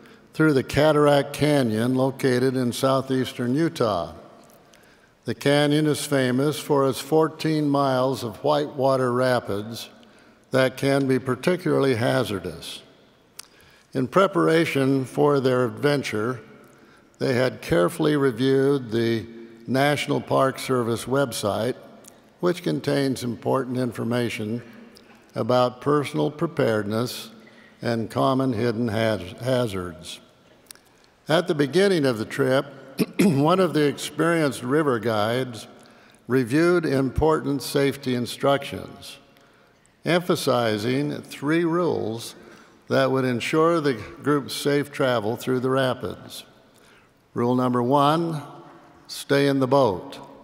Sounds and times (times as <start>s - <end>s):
Speech: 0.3s - 4.2s, 5.2s - 12.9s, 13.9s - 16.6s, 17.2s - 21.8s, 22.4s - 30.2s, 31.2s - 39.3s, 40.0s - 46.5s, 47.4s - 50.3s.